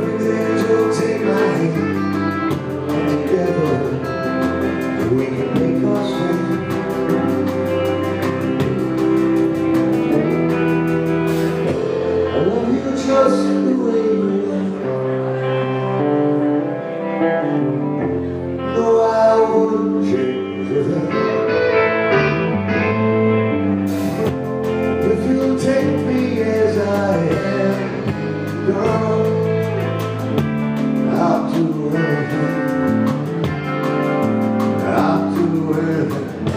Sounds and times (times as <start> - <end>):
Music: 0.0 - 36.5.